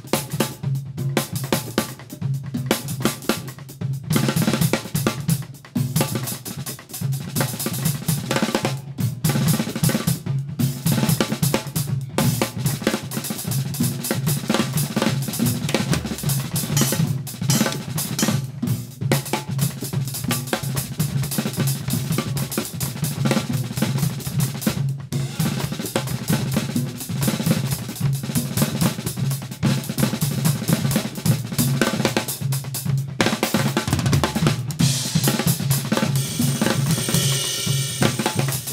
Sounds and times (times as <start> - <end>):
Drum: 0.0 - 38.7
Drum kit: 0.0 - 38.7.